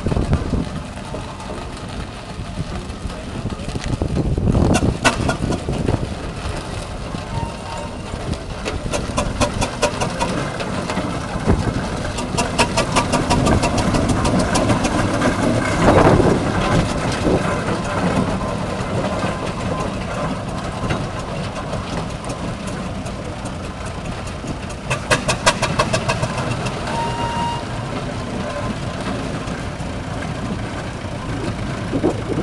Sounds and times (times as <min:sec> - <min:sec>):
Heavy engine (low frequency): 0:00.0 - 0:32.4
Idling: 0:00.0 - 0:32.4
Vehicle: 0:00.0 - 0:32.4.